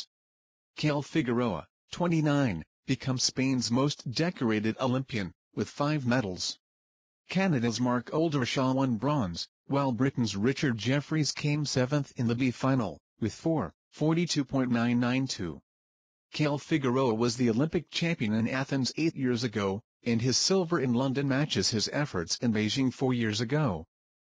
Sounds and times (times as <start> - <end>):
Speech: 0.8 - 6.6, 7.3 - 15.6, 16.3 - 23.9.